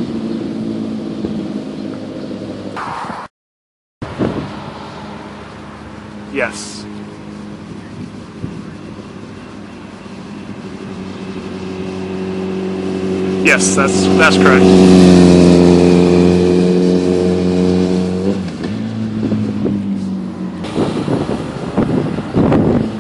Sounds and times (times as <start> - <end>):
Speech: 6.3 - 6.9, 13.4 - 14.7.